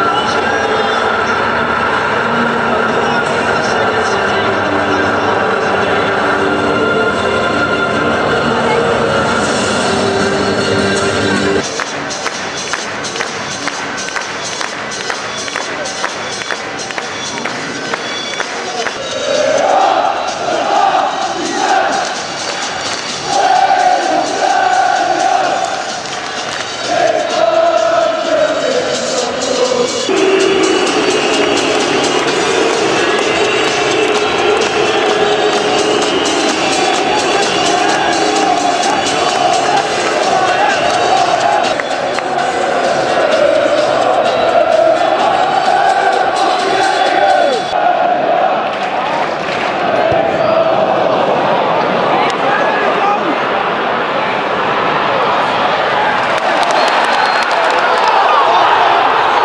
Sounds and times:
Speech: 0.0s - 6.8s, 8.3s - 9.5s, 51.9s - 54.4s
Music: 0.0s - 51.0s.

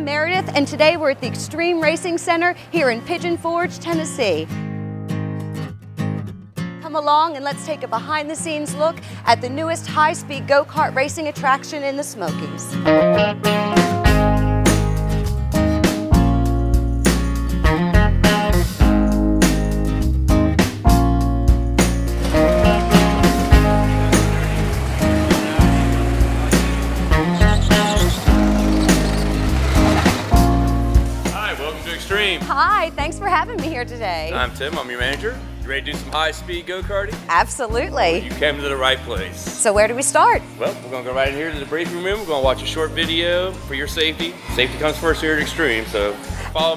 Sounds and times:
Music: 0.0s - 46.7s.

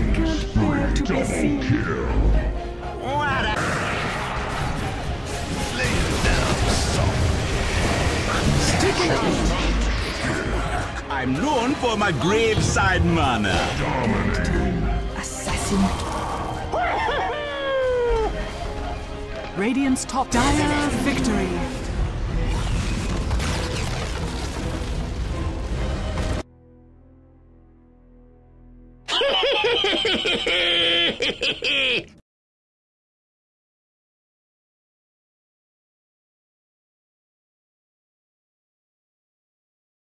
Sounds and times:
Music: 0.0s - 32.2s
Speech: 8.6s - 9.8s, 11.1s - 15.9s.

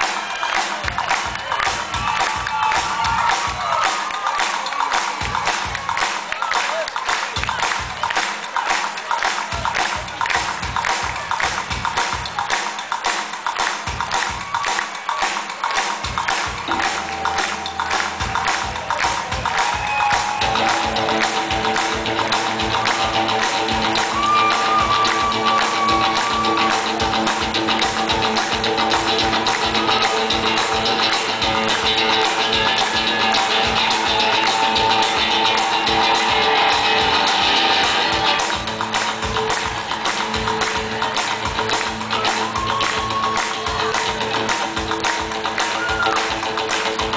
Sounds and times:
Music: 0.0s - 47.1s.

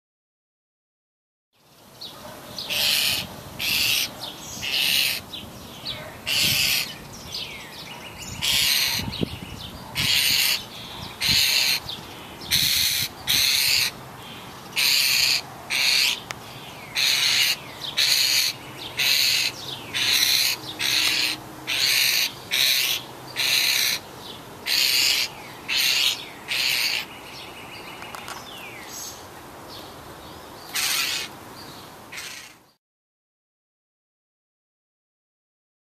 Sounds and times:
Rustle: 1.6s - 32.8s.

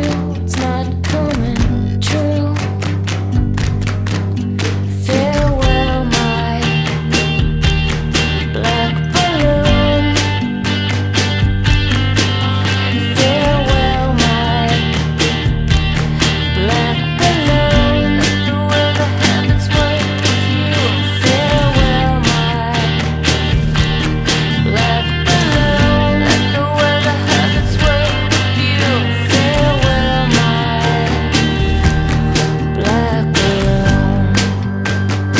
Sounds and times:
Independent music: 0.0s - 35.3s.

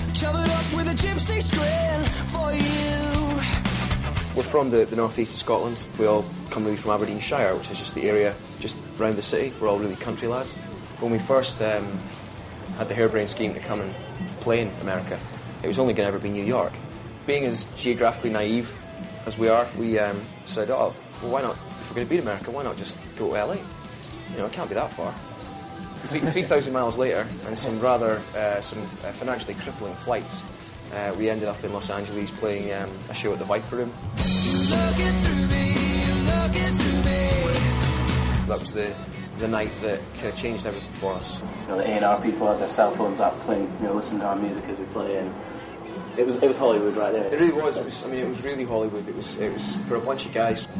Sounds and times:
Music: 0.0s - 50.7s
Speech: 4.4s - 12.0s, 12.8s - 23.7s, 24.3s - 25.2s, 26.1s - 34.0s, 38.5s - 45.4s, 46.2s - 50.7s.

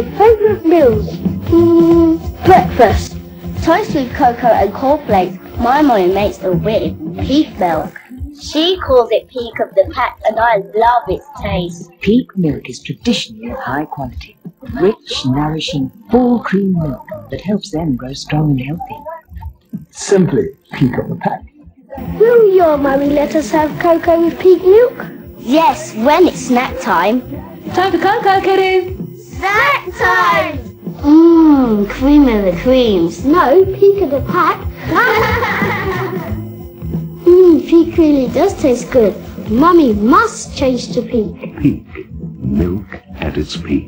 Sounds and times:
Music: 0.0s - 43.8s
Speech: 7.3s - 21.5s, 42.4s - 43.8s.

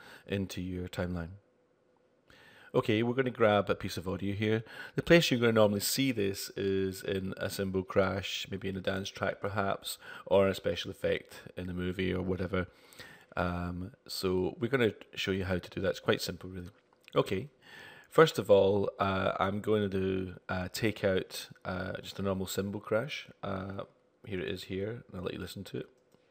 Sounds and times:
Speech: 0.3s - 1.4s, 2.7s - 12.8s, 13.4s - 26.0s.

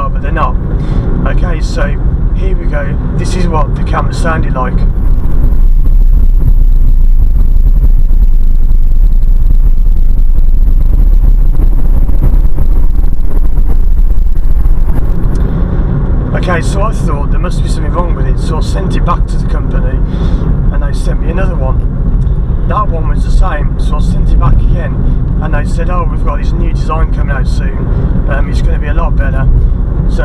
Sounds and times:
Speech: 0.0s - 0.6s, 1.2s - 4.9s, 16.3s - 20.0s, 20.7s - 21.8s, 22.7s - 29.5s
Car: 0.0s - 30.2s.

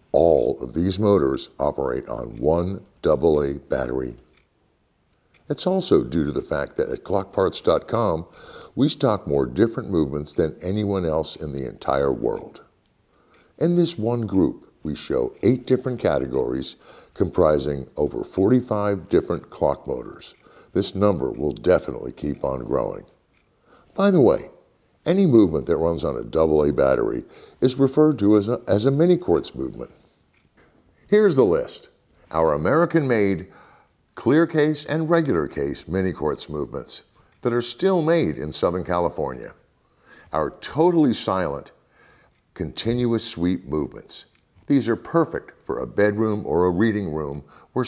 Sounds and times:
Speech: 0.1s - 4.3s, 5.5s - 12.8s, 13.6s - 23.2s, 23.9s - 30.1s, 31.1s - 33.6s, 34.2s - 39.7s, 40.3s - 41.8s, 42.5s - 47.8s.

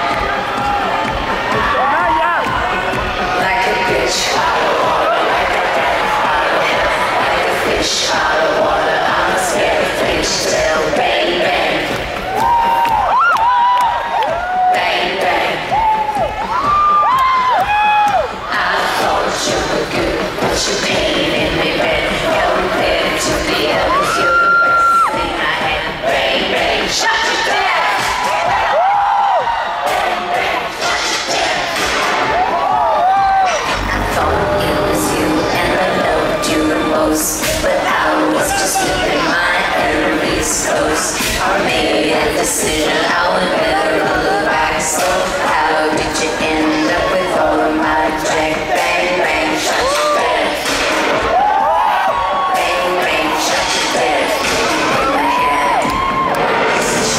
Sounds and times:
Music: 0.0s - 57.1s.

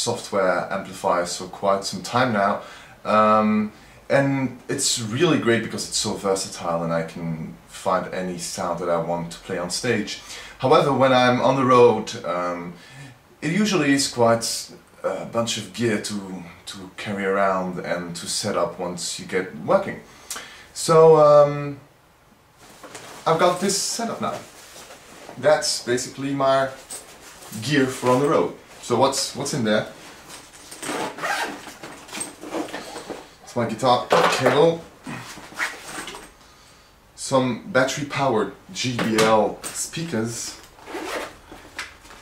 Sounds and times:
Speech: 0.0s - 12.8s, 13.4s - 20.1s, 20.8s - 21.9s, 23.2s - 24.5s, 25.4s - 26.9s, 27.5s - 30.0s, 33.5s - 34.9s, 37.2s - 40.7s.

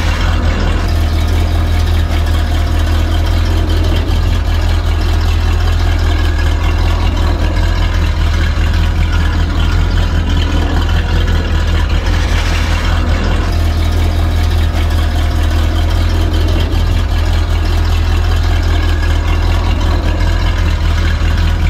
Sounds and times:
Car: 0.0s - 21.6s
Idling: 0.0s - 21.6s
Medium engine (mid frequency): 0.0s - 21.6s.

